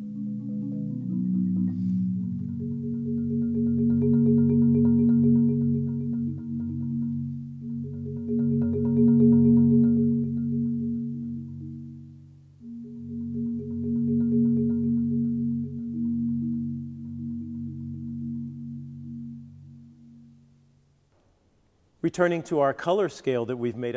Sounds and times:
Marimba, xylophone: 0.0s - 20.4s
Glockenspiel: 0.0s - 20.5s.

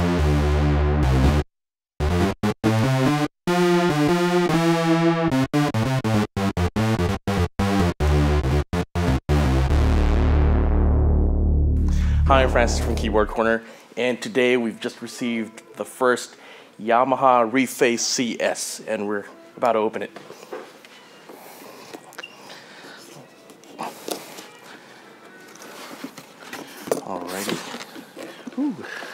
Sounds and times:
Speech: 12.1s - 20.2s, 27.0s - 27.8s.

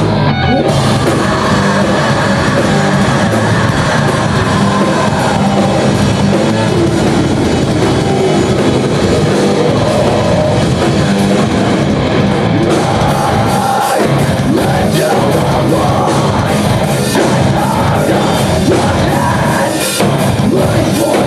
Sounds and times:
Music: 0.0s - 21.2s.

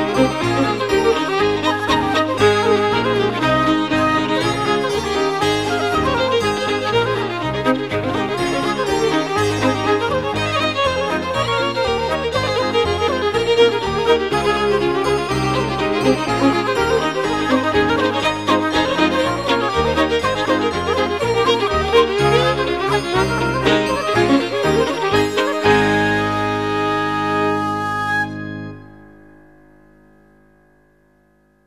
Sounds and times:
Saxophone: 0.0s - 29.2s.

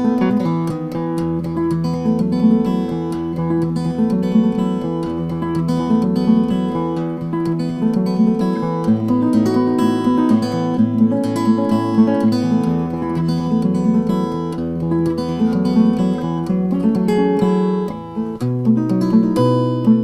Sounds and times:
Strum: 0.0s - 2.0s
Acoustic guitar: 0.0s - 20.0s.

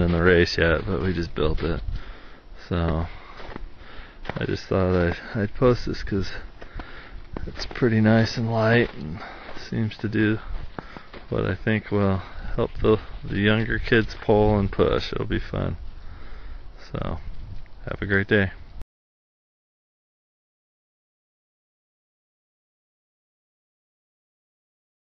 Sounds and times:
Speech: 0.0s - 1.8s, 2.6s - 3.2s, 4.3s - 6.5s, 7.4s - 10.5s, 11.3s - 15.8s, 16.8s - 18.6s.

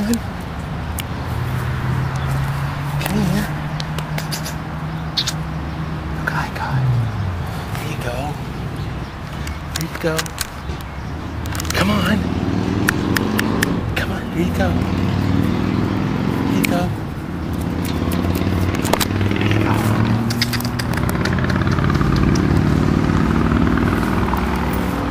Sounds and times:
Speech: 3.0s - 3.6s, 7.8s - 8.4s, 9.8s - 10.3s, 11.8s - 12.3s, 14.0s - 14.9s, 16.5s - 17.0s.

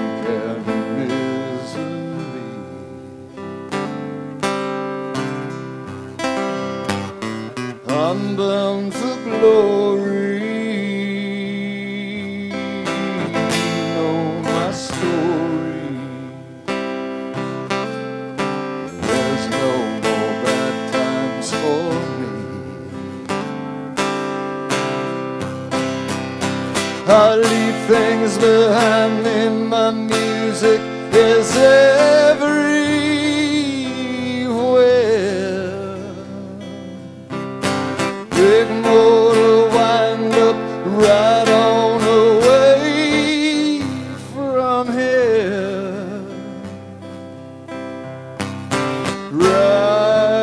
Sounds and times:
Country: 0.0s - 50.4s.

